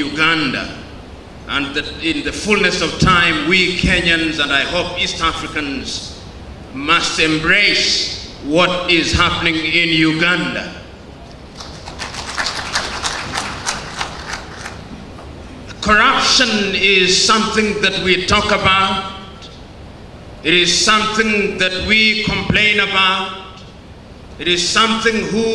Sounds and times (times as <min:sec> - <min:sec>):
Male speech, man speaking: 0:00.0 - 0:00.8, 0:01.5 - 0:06.1, 0:06.8 - 0:10.8, 0:15.8 - 0:19.5, 0:20.4 - 0:23.6, 0:24.4 - 0:25.5
Narration, monologue: 0:00.0 - 0:25.5.